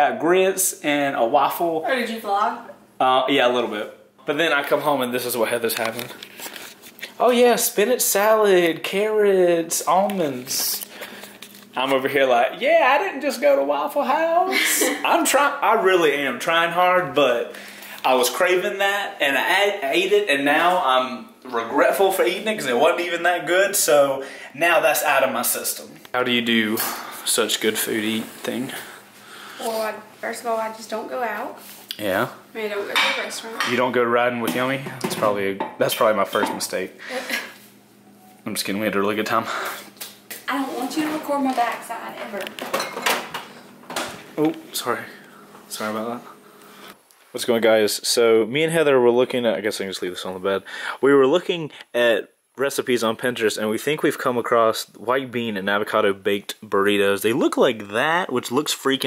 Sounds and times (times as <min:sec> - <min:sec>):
Inside, small room: 0:00.0 - 0:59.0.